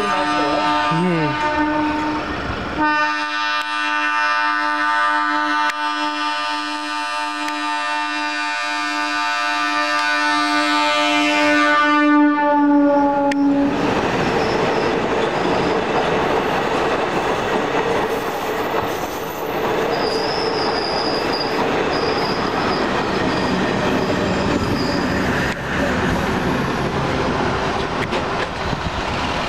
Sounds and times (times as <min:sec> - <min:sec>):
Train horn: 0:00.0 - 0:13.8
Railroad car, train wagon: 0:00.0 - 0:29.4.